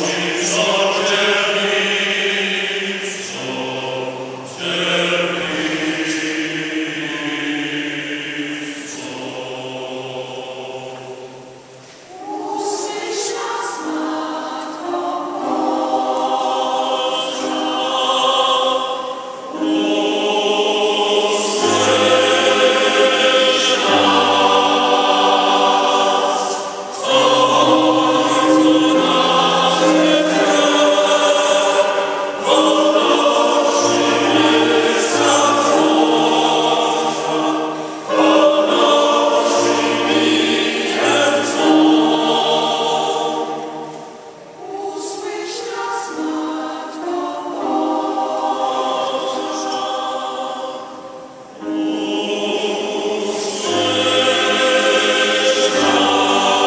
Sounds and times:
Choir: 0.0 - 56.6.

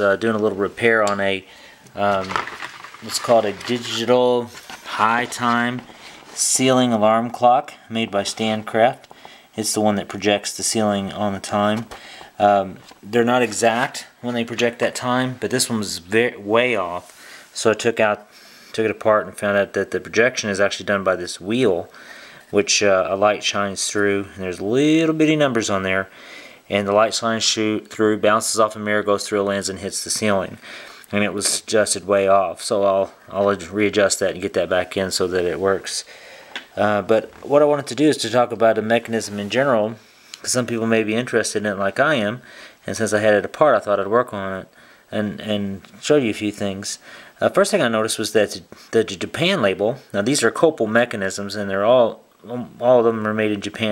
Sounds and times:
Speech: 0.0 - 26.1, 26.7 - 36.1, 36.7 - 53.9.

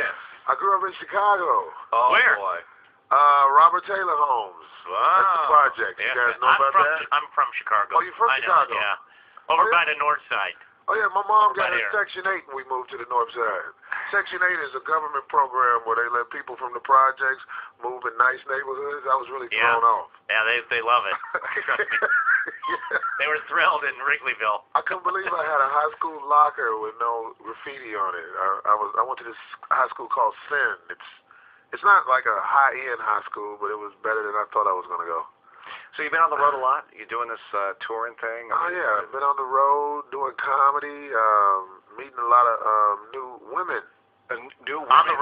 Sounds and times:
Speech: 0.0 - 21.9, 22.7 - 45.2.

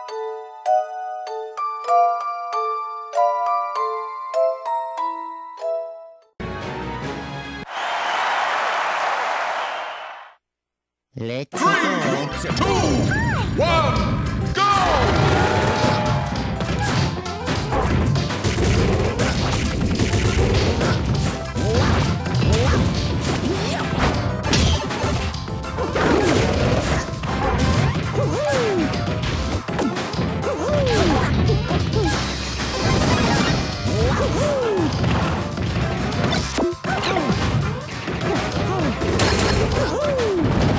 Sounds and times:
Music: 0.0 - 7.7, 11.6 - 40.7.

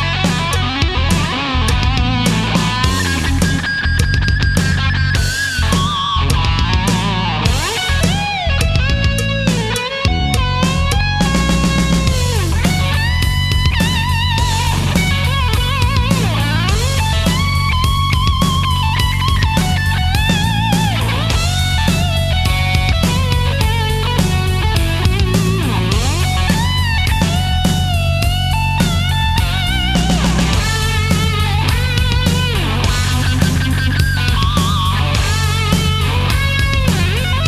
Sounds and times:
Music: 0.0 - 37.4.

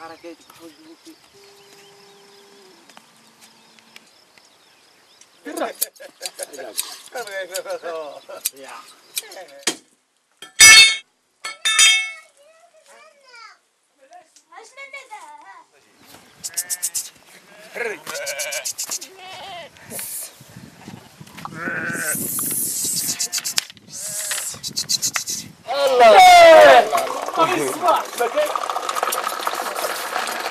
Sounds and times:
Bleat: 16.4 - 19.7, 21.5 - 22.4, 23.0 - 24.3.

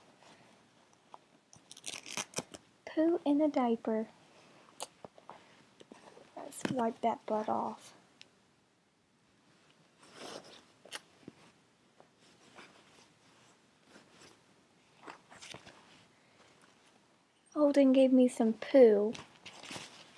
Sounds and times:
Speech: 2.9 - 4.1, 6.4 - 8.0, 17.5 - 19.2.

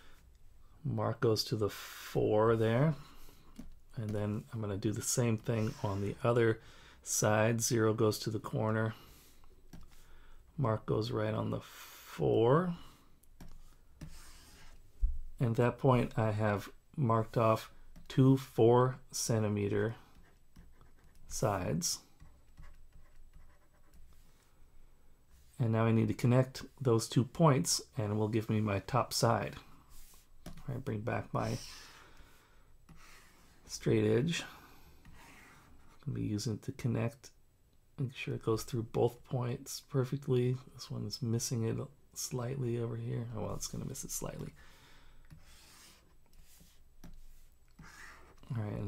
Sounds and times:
Speech: 0.8 - 3.0, 4.0 - 9.0, 10.6 - 12.8, 15.4 - 20.0, 21.3 - 22.0, 25.6 - 29.7, 30.6 - 31.8, 33.7 - 34.5, 36.1 - 37.3, 38.0 - 44.6, 48.5 - 48.8
Writing: 5.3 - 6.2, 12.8 - 14.9, 19.7 - 24.4, 29.7 - 30.7, 31.4 - 33.7, 34.7 - 36.1, 45.3 - 48.5.

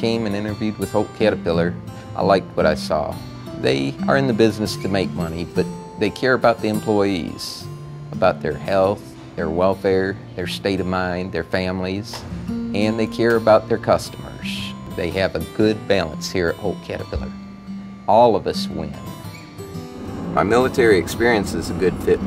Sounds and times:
Speech: 0.0 - 12.2, 12.8 - 17.4, 18.1 - 19.0, 20.4 - 22.2
Music: 0.0 - 22.2.

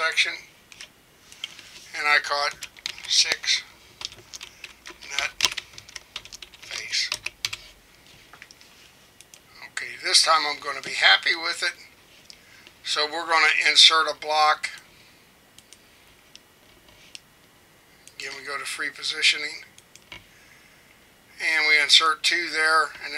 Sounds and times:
Speech: 0.0 - 0.4, 1.9 - 3.7, 5.0 - 5.3, 6.7 - 7.2, 9.6 - 11.9, 12.8 - 14.8, 18.2 - 19.7, 21.4 - 23.1
Typing: 2.4 - 3.4, 4.0 - 7.8.

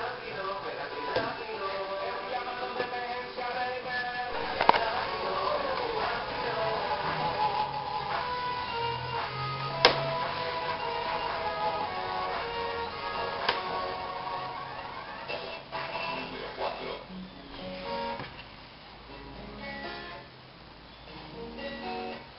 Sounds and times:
Music: 0.0 - 22.3.

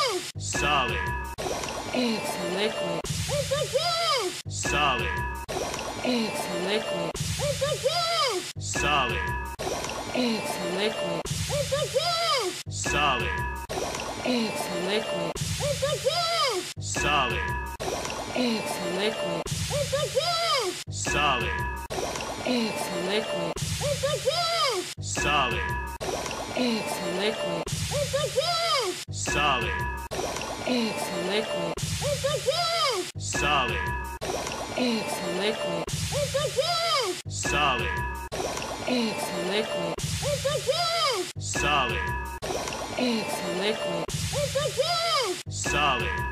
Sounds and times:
Speech: 0.0 - 1.1, 2.0 - 5.2, 6.1 - 9.4, 10.2 - 13.4, 14.3 - 17.6, 18.4 - 21.7, 22.5 - 25.7, 26.6 - 29.8, 30.7 - 33.9, 34.8 - 38.0, 38.9 - 42.2, 43.0 - 46.2
Liquid: 0.0 - 8.1, 8.7 - 46.3
Music: 4.5 - 5.5, 8.6 - 9.6, 12.7 - 13.7, 16.8 - 17.8, 20.9 - 21.9, 29.1 - 30.1, 33.2 - 34.2, 37.3 - 38.4, 41.4 - 42.4, 45.5 - 46.3.

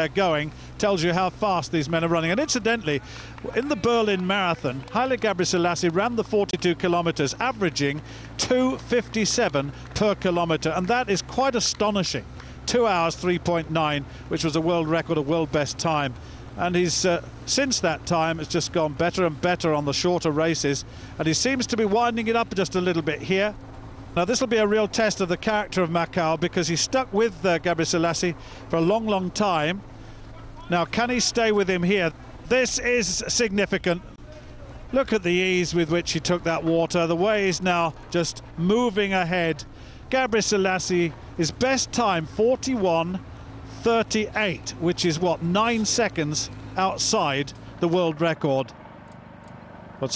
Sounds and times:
Speech: 0.0 - 23.6, 24.2 - 43.2, 43.8 - 48.7
Outside, urban or manmade: 0.0 - 50.1.

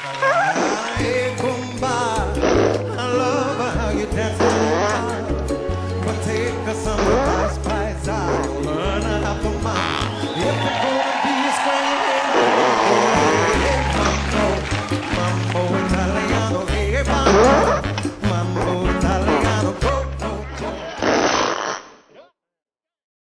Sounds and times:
Music: 0.0 - 21.3.

